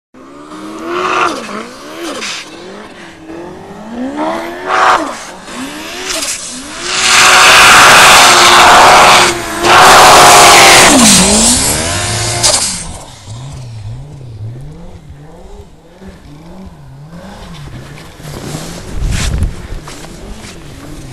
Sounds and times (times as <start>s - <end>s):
Vehicle: 0.2s - 21.1s.